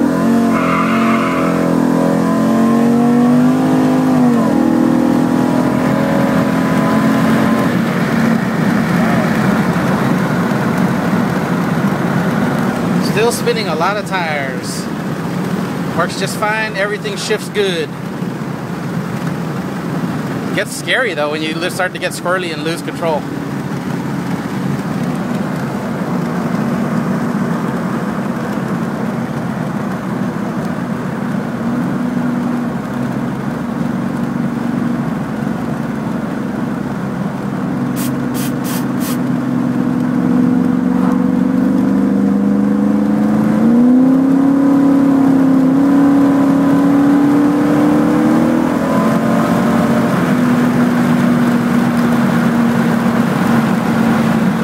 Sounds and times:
Speech: 13.0 - 14.9, 16.0 - 17.9, 20.6 - 23.2.

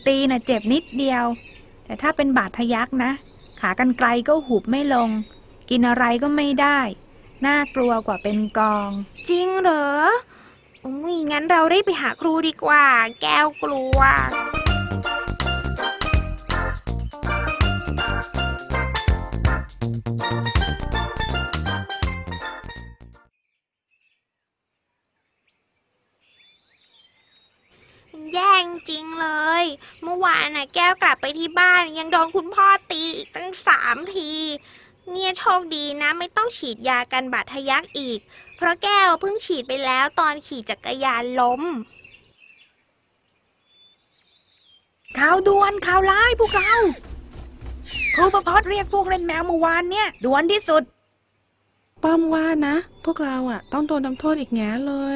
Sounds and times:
Environmental noise: 0.0 - 14.4, 24.0 - 55.1
Music: 13.9 - 23.3, 45.7 - 49.6.

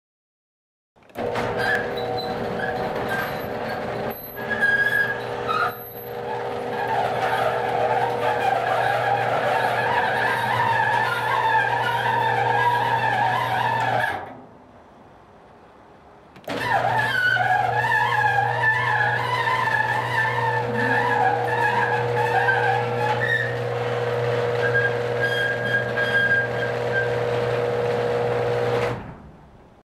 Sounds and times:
Door: 1.1 - 14.4, 16.4 - 29.3.

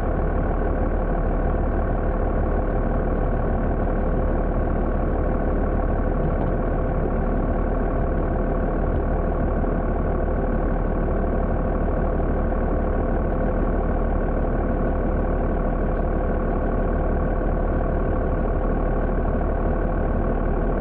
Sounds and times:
Vehicle: 0.0 - 20.8.

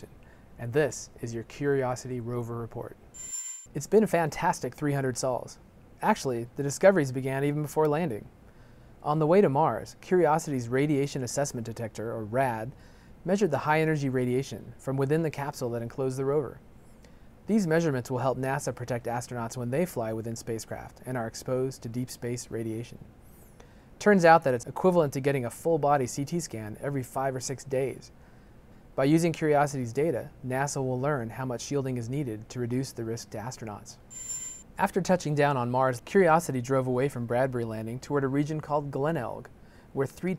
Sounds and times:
Speech: 0.0 - 3.0, 3.8 - 8.3, 9.0 - 16.6, 17.5 - 23.1, 24.0 - 28.1, 29.0 - 34.0, 34.8 - 40.3.

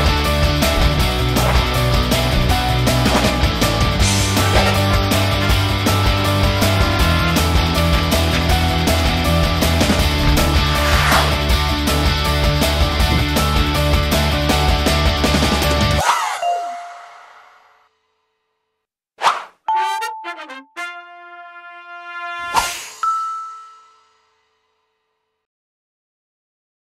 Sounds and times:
Music: 0.0 - 16.0, 19.7 - 25.4.

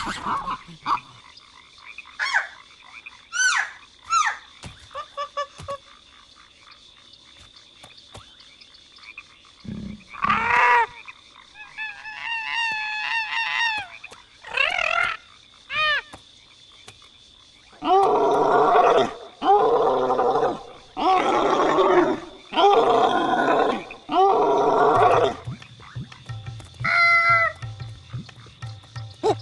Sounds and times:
Outside, rural or natural: 0.0 - 29.4
Roar: 9.6 - 10.9, 17.8 - 25.4.

